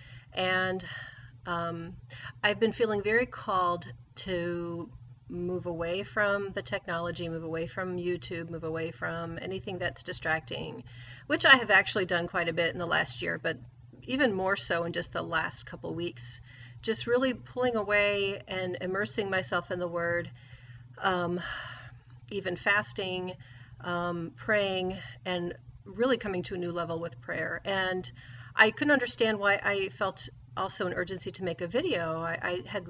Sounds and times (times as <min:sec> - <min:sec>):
Speech: 0:00.4 - 0:00.9, 0:01.5 - 0:20.3, 0:21.0 - 0:21.6, 0:22.3 - 0:32.8.